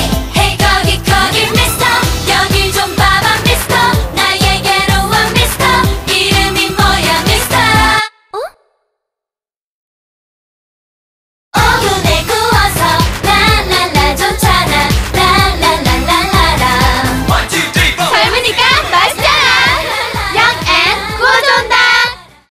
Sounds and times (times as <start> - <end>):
Music: 0.0 - 8.1, 11.6 - 22.5
Speech: 18.0 - 19.5.